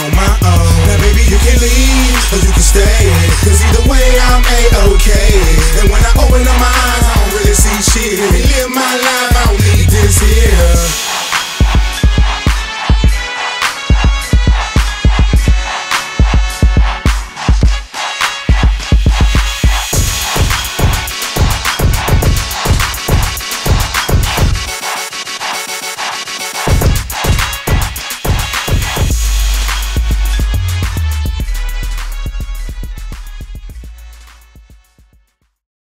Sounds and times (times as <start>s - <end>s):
Hip hop music: 0.0s - 35.6s.